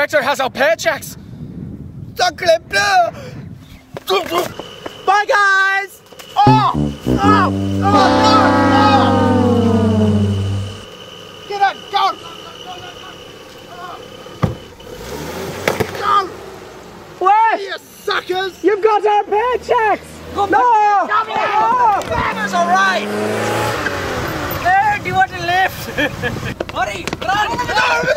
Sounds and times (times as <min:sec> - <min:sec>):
Outside, urban or manmade: 0:00.0 - 0:28.1
Music: 0:06.4 - 0:10.9
Car: 0:08.0 - 0:28.1.